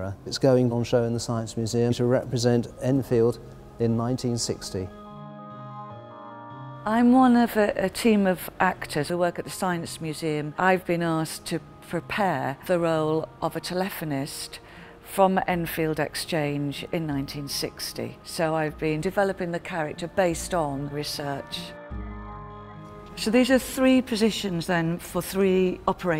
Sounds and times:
Music: 0:00.0 - 0:26.2.

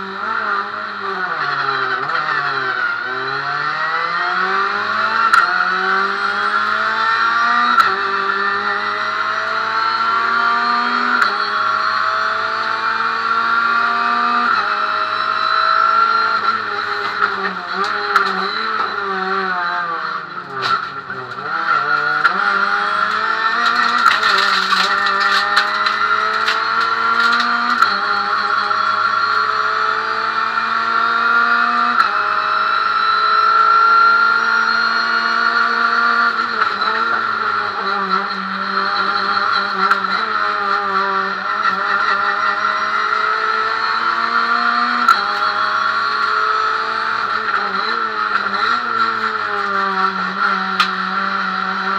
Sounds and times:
Car: 0:00.0 - 0:51.9.

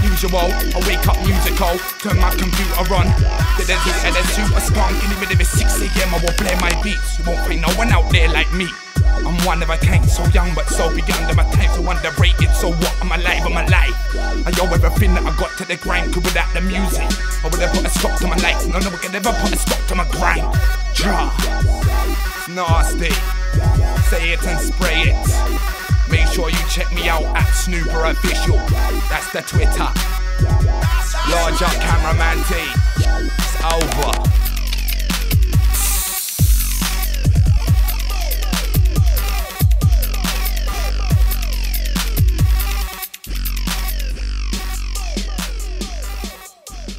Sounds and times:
Hip hop music: 0:00.0 - 0:46.9.

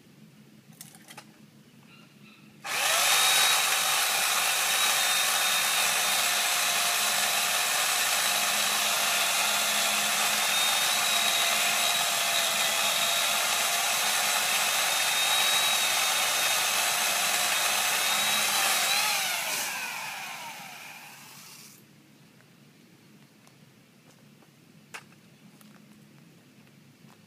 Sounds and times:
Chainsaw: 0:02.6 - 0:21.8.

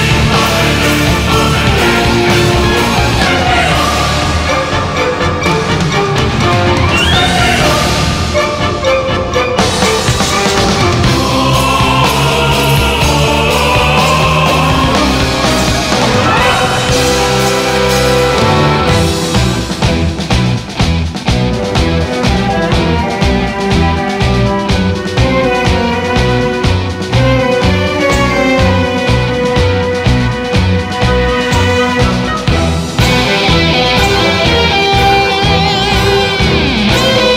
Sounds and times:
Music: 0:00.0 - 0:37.3.

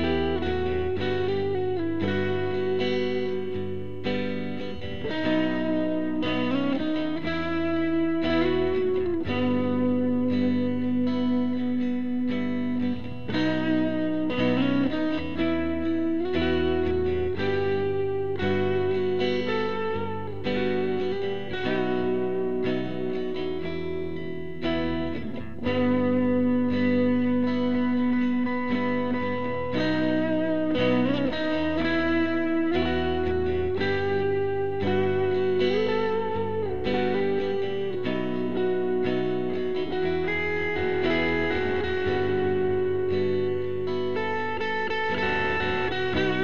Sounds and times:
Distortion: 0:00.0 - 0:46.4
Effects unit: 0:00.0 - 0:46.4
Guitar: 0:00.0 - 0:46.4.

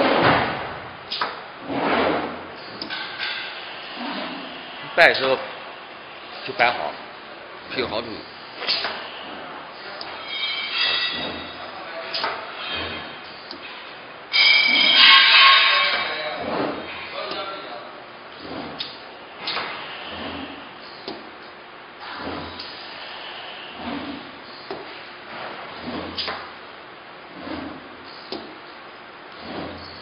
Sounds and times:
Speech: 0:04.9 - 0:05.5, 0:06.4 - 0:07.0, 0:07.7 - 0:08.8, 0:11.6 - 0:12.6, 0:17.1 - 0:18.1.

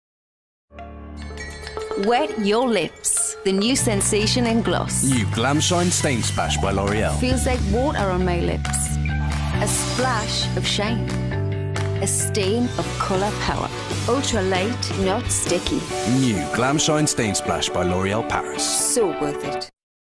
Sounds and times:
Music: 0:00.7 - 0:19.8
Speech: 0:02.0 - 0:08.9, 0:14.2 - 0:19.6.

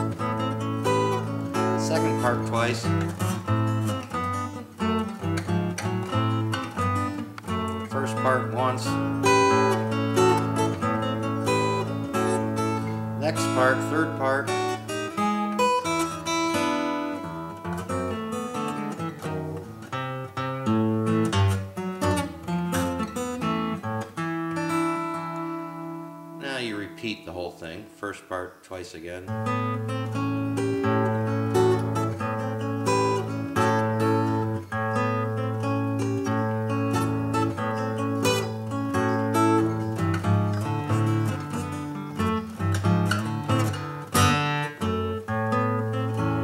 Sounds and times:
Strum: 0:00.0 - 0:27.8, 0:29.3 - 0:46.4
Acoustic guitar: 0:00.0 - 0:46.4
Blues: 0:00.0 - 0:46.4
Speech: 0:01.8 - 0:03.0, 0:07.9 - 0:09.0, 0:13.2 - 0:14.5, 0:26.4 - 0:29.3.

